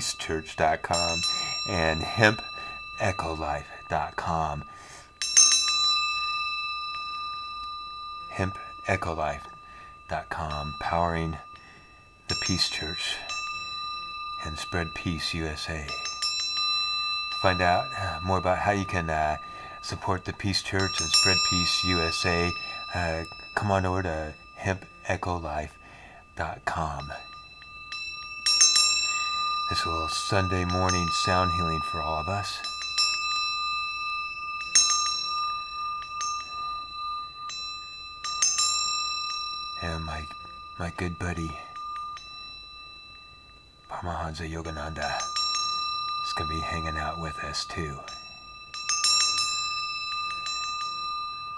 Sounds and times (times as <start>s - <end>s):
Speech: 0.0s - 4.7s, 8.4s - 9.5s, 10.1s - 11.4s, 12.3s - 13.2s, 14.4s - 16.0s, 17.4s - 25.8s, 26.4s - 27.2s, 29.7s - 32.7s, 39.8s - 41.7s, 43.9s - 45.3s, 46.3s - 48.2s.